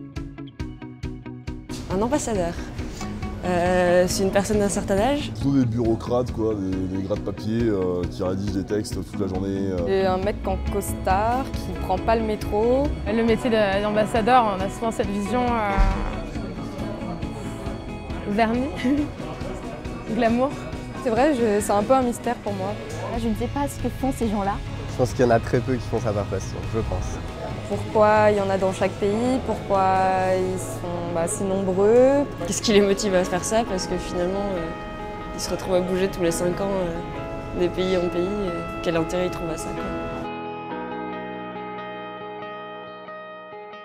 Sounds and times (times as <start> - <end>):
Music: 0.0 - 43.8.